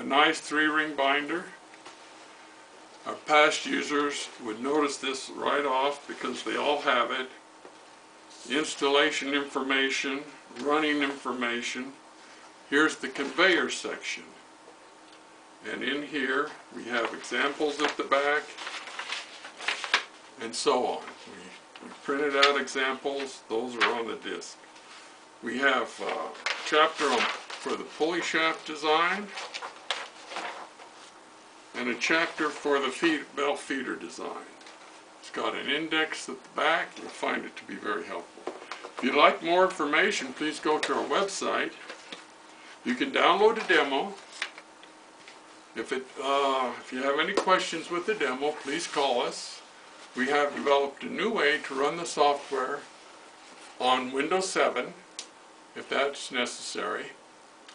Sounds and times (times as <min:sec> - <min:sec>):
Speech: 0:00.0 - 0:01.6, 0:03.0 - 0:07.4, 0:08.3 - 0:12.0, 0:12.7 - 0:14.4, 0:15.6 - 0:18.6, 0:20.4 - 0:24.6, 0:25.4 - 0:29.4, 0:31.7 - 0:34.6, 0:35.2 - 0:38.4, 0:39.0 - 0:41.9, 0:42.8 - 0:44.3, 0:45.7 - 0:52.9, 0:53.8 - 0:55.1, 0:55.7 - 0:57.2.